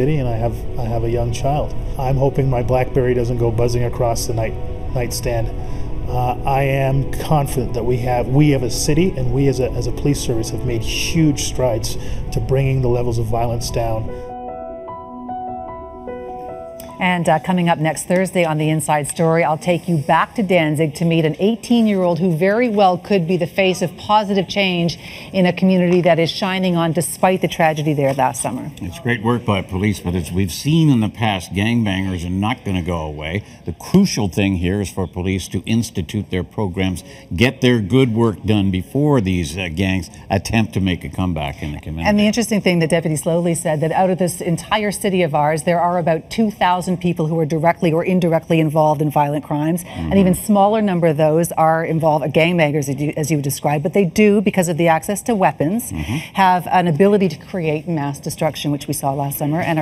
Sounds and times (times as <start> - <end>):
Music: 0.0 - 22.8.